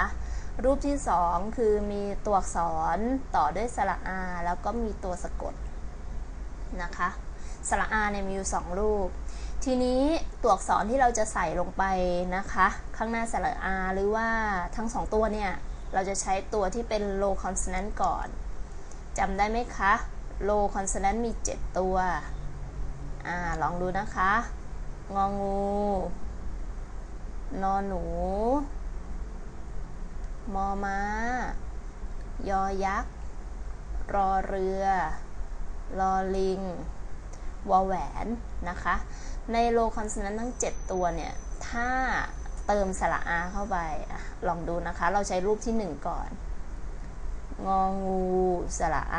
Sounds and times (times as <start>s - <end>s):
Speech: 0.0s - 5.6s, 6.7s - 18.4s, 19.2s - 22.3s, 23.2s - 26.2s, 27.5s - 28.7s, 30.5s - 31.6s, 32.4s - 33.1s, 34.1s - 35.2s, 35.9s - 36.9s, 37.7s - 46.4s, 47.6s - 49.1s.